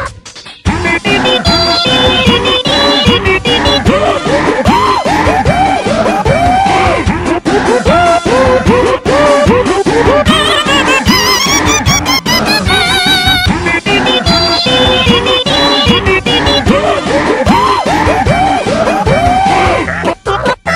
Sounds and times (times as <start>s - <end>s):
Music: 0.0s - 20.7s.